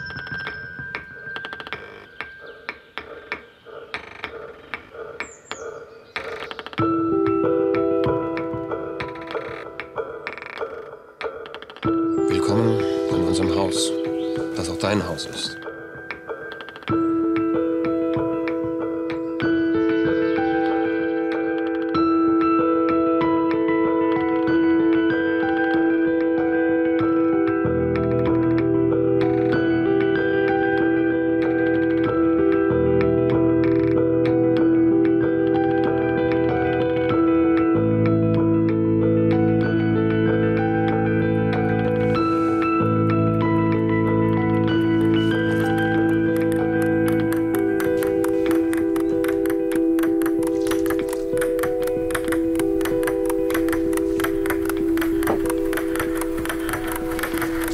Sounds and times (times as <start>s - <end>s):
Music: 0.0s - 57.7s.